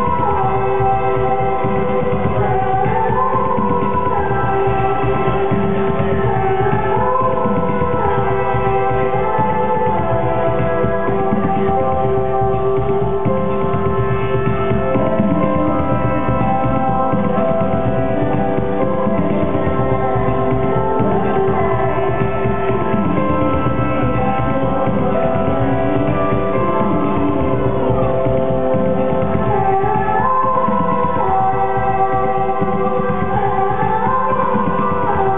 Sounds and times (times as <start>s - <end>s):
Electronic music: 0.0s - 35.3s.